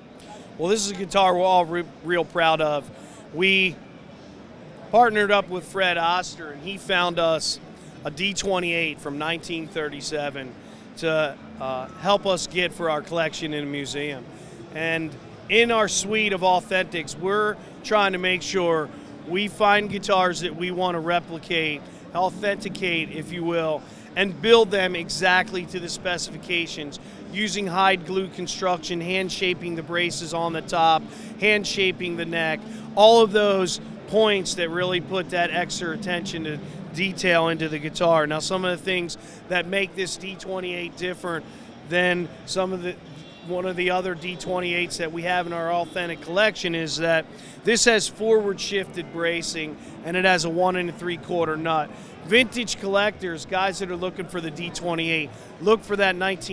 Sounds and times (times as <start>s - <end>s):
Speech: 0.2s - 3.8s, 4.8s - 56.5s.